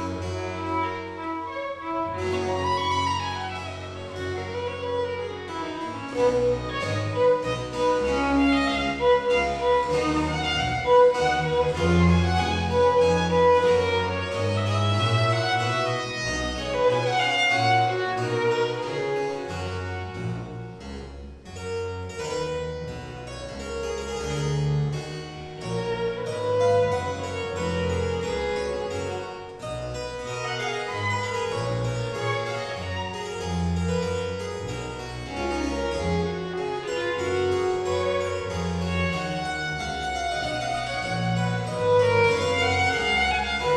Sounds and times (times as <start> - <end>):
Violin, fiddle: 0.0 - 20.6, 25.6 - 43.7.